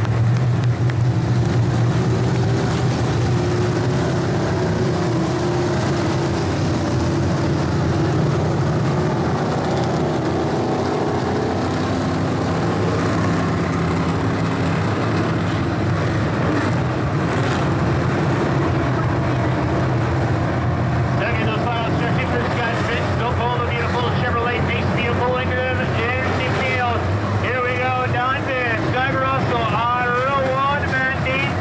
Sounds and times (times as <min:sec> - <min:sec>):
Speech: 0:21.2 - 0:31.6.